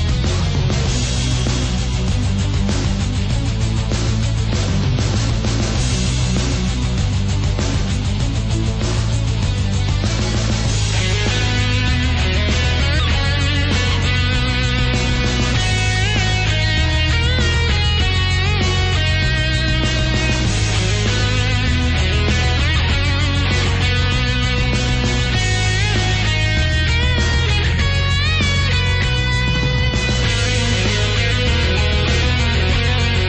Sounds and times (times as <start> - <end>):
Exciting music: 0.0 - 33.2.